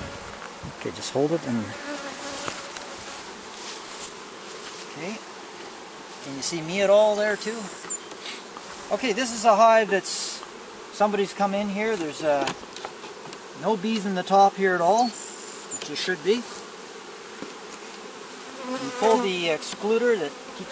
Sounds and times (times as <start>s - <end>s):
Bee, wasp, etc.: 0.0s - 20.7s
Fly, housefly: 0.0s - 20.7s.